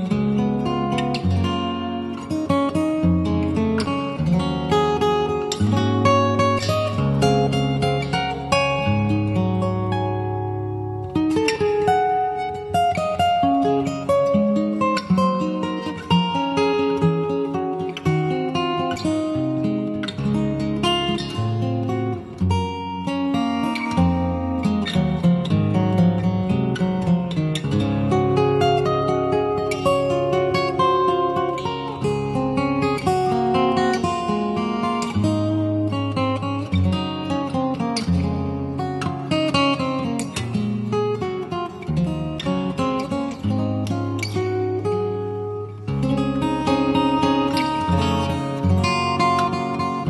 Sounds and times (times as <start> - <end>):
Acoustic guitar: 0.0 - 50.0.